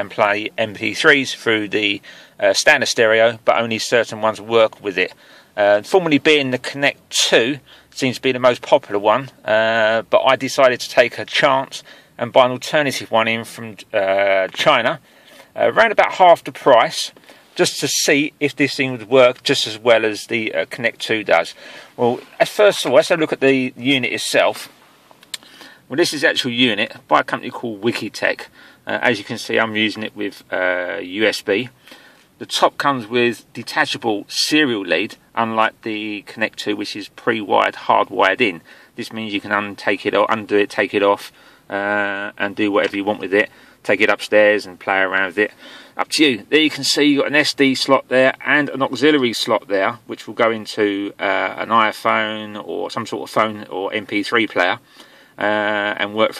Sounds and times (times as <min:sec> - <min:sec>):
Speech: 0:00.0 - 0:15.0, 0:15.6 - 0:24.8, 0:25.9 - 0:31.8, 0:32.4 - 0:54.8, 0:55.4 - 0:56.3.